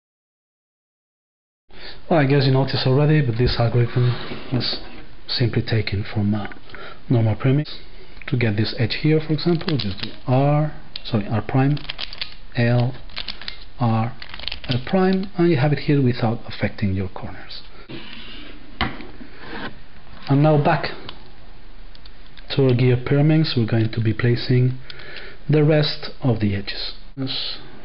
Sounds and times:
Speech: 0:02.1 - 0:11.9, 0:12.6 - 0:13.0, 0:13.8 - 0:17.7, 0:20.2 - 0:21.1, 0:22.5 - 0:24.8, 0:25.5 - 0:27.7.

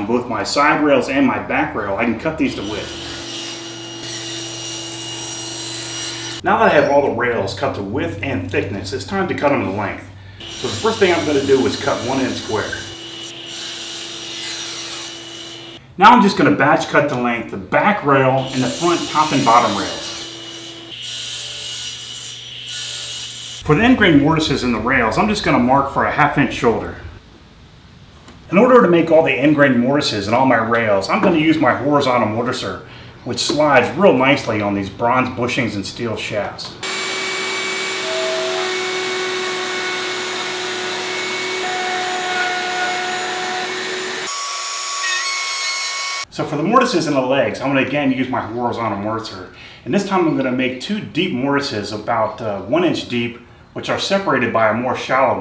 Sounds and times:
Speech: 0:00.0 - 0:02.9, 0:06.4 - 0:12.9, 0:16.0 - 0:20.1, 0:23.6 - 0:27.1, 0:28.5 - 0:36.8, 0:46.3 - 0:55.4.

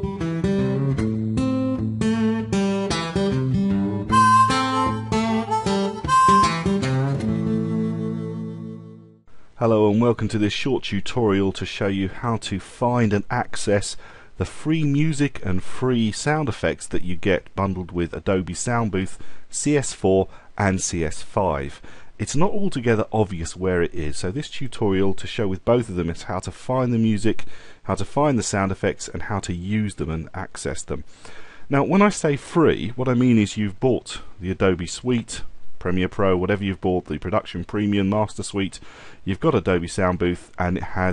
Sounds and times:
Speech: 0:09.6 - 0:31.1, 0:31.7 - 0:41.1.

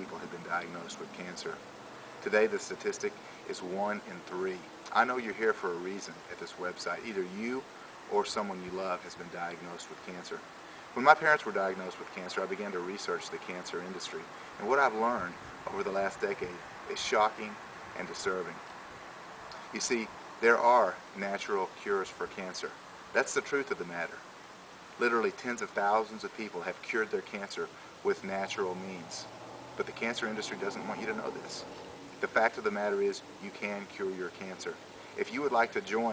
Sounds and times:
Speech: 0:00.0 - 0:01.6, 0:02.2 - 0:10.4, 0:11.0 - 0:18.6, 0:19.7 - 0:24.2, 0:25.0 - 0:36.1.

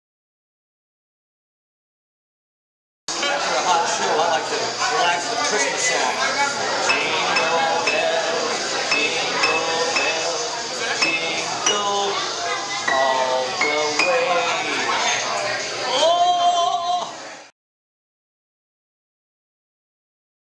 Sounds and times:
Speech: 0:03.1 - 0:17.5
Music: 0:06.8 - 0:14.9.

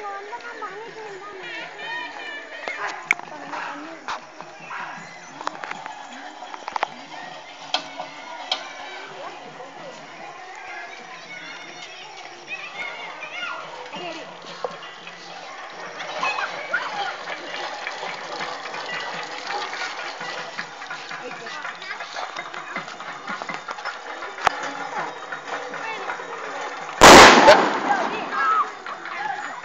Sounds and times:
Outside, rural or natural: 0:00.0 - 0:29.6.

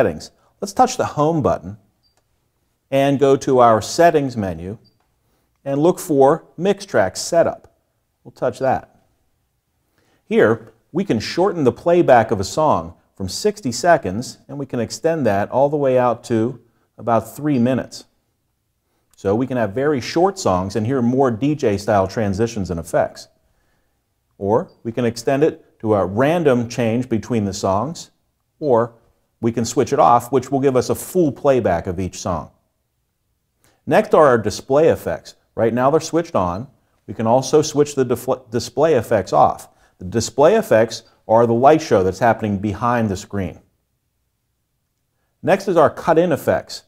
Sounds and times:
Speech: 0:00.0 - 0:01.8, 0:02.9 - 0:04.8, 0:05.6 - 0:09.0, 0:10.3 - 0:18.1, 0:19.2 - 0:23.3, 0:24.4 - 0:32.6, 0:33.9 - 0:43.7, 0:45.4 - 0:46.8.

